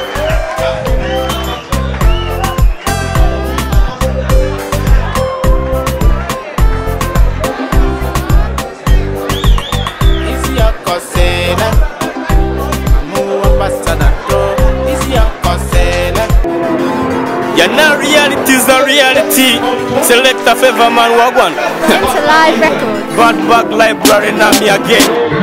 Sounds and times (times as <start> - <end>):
Pop music: 0.0 - 25.4.